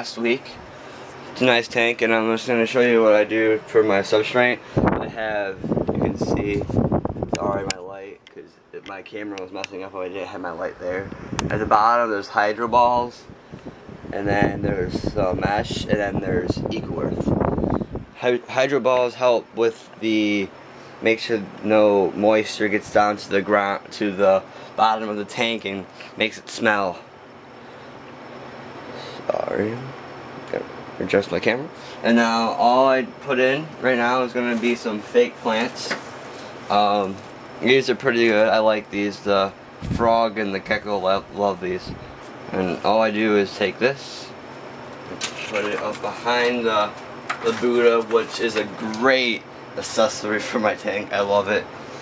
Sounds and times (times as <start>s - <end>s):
Speech: 0.0s - 0.6s, 1.4s - 6.7s, 7.4s - 13.3s, 14.1s - 17.3s, 18.2s - 27.0s, 29.2s - 36.0s, 36.7s - 44.4s, 45.3s - 51.7s.